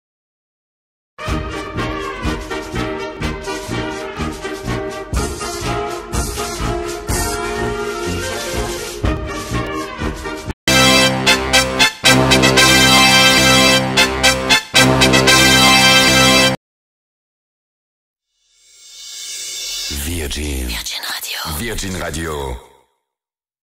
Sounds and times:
Music: 1.2s - 16.6s
Speech: 19.9s - 22.9s.

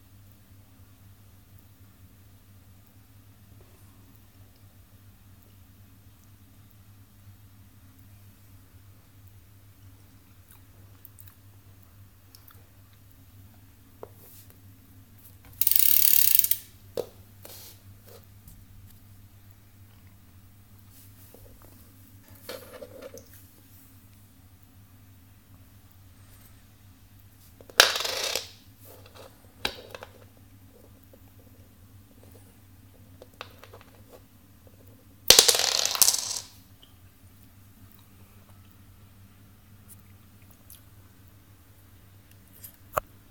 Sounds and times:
Inside, small room: 0.0s - 43.3s.

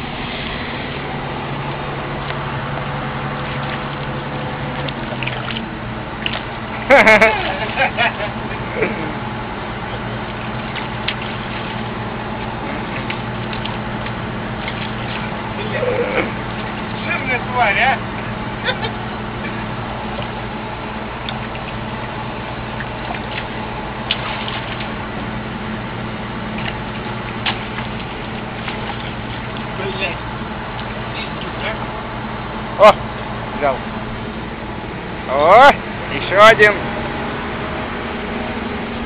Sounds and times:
Outside, rural or natural: 0.0s - 39.0s
Vehicle: 0.0s - 39.0s
Speech: 17.0s - 18.0s, 29.8s - 30.2s, 35.3s - 36.8s.

